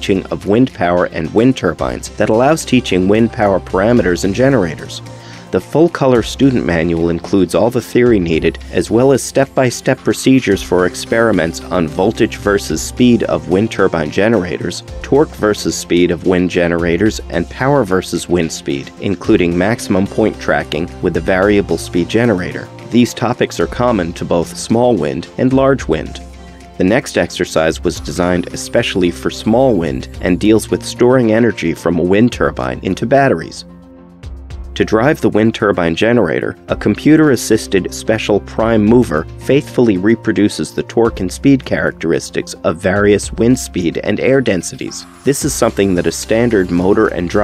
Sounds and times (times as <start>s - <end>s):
Speech: 0.0s - 33.7s, 34.8s - 47.4s
Music: 0.0s - 47.4s.